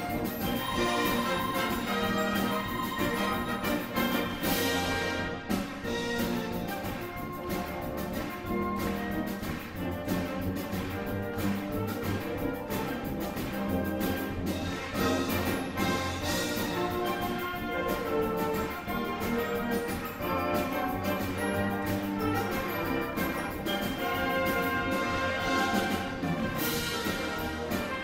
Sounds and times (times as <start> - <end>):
Orchestra: 0.0 - 28.0.